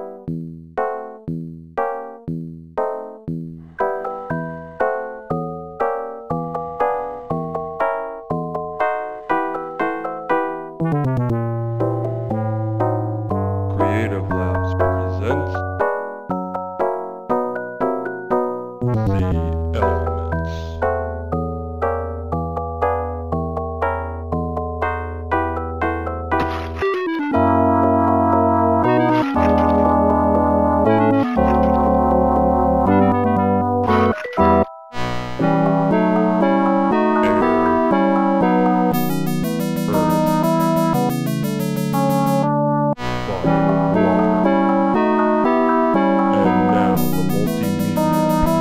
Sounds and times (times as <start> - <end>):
Music: 0.0 - 48.6
Sound effect: 26.4 - 27.6, 28.8 - 30.1, 30.9 - 35.6, 37.2 - 44.7, 46.3 - 48.6.